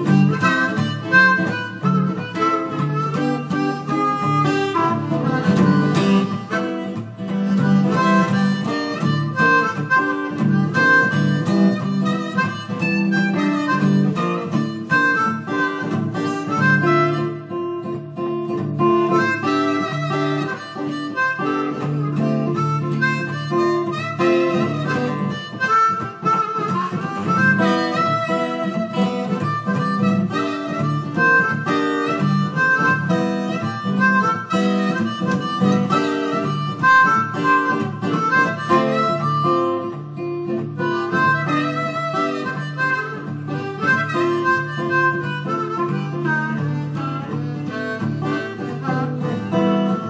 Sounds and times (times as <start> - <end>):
Blues: 0.0 - 50.0
Guitar: 0.0 - 50.0
Harmonica: 0.0 - 50.0.